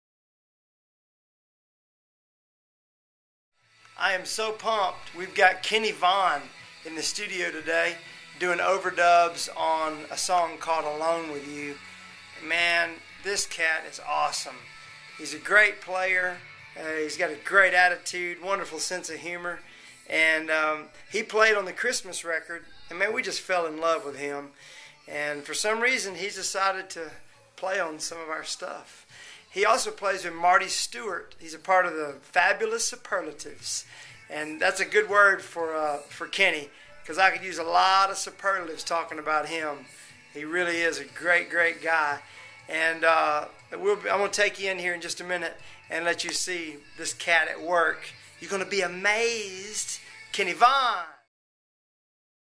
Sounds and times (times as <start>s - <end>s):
Music: 3.6s - 51.3s
Speech: 4.0s - 11.8s, 12.4s - 14.6s, 15.2s - 24.5s, 25.1s - 51.3s.